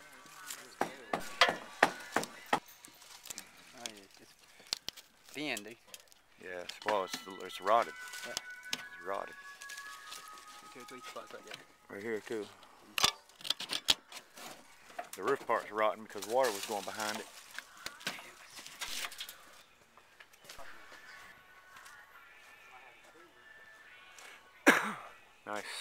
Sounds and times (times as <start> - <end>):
Music: 0.0 - 4.7, 6.3 - 25.8.